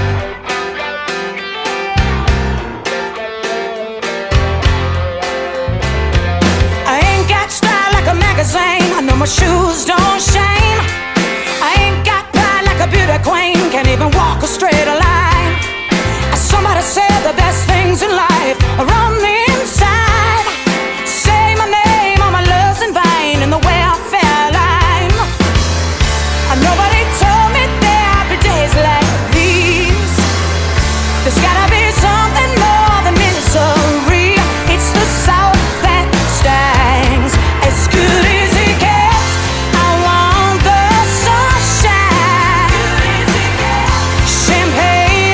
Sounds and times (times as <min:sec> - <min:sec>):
Pop music: 0:00.0 - 0:45.3.